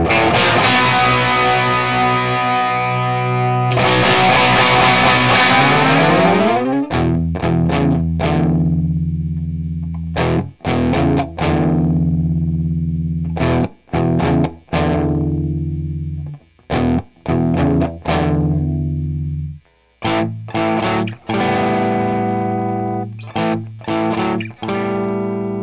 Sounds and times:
Electric guitar: 0.0s - 25.6s.

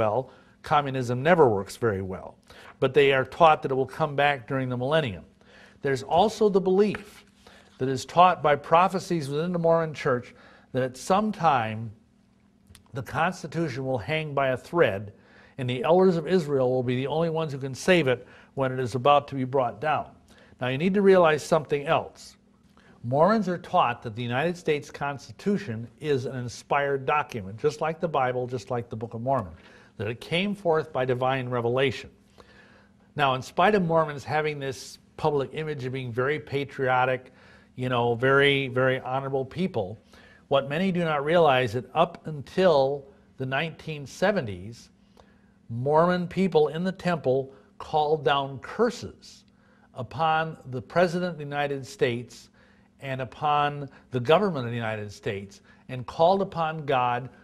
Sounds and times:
Speech: 0.0s - 12.0s, 12.8s - 22.4s, 23.0s - 32.2s, 33.2s - 45.0s, 45.7s - 57.4s.

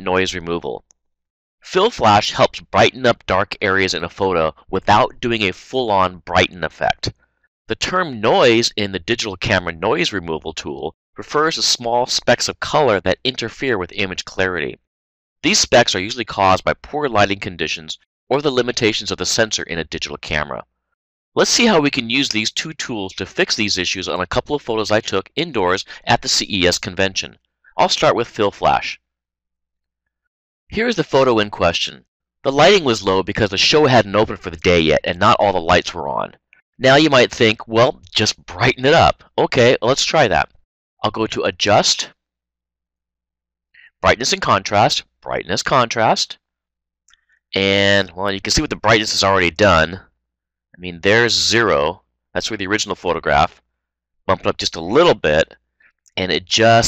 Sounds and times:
Speech: 0.0s - 0.8s, 1.6s - 7.1s, 7.7s - 20.7s, 21.4s - 29.0s, 30.7s - 42.2s, 43.8s - 46.4s, 47.6s - 50.1s, 50.8s - 53.6s, 54.3s - 56.8s.

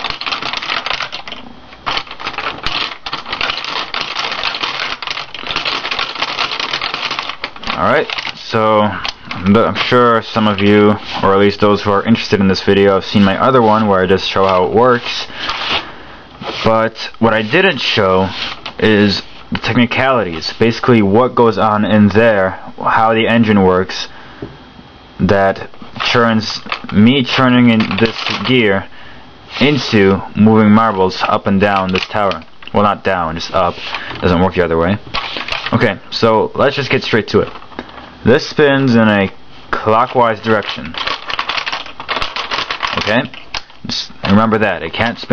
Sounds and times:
Speech: 7.7s - 15.3s, 16.6s - 24.1s, 25.2s - 28.9s, 29.6s - 35.1s, 35.7s - 37.6s, 38.2s - 41.0s, 43.0s - 45.3s.

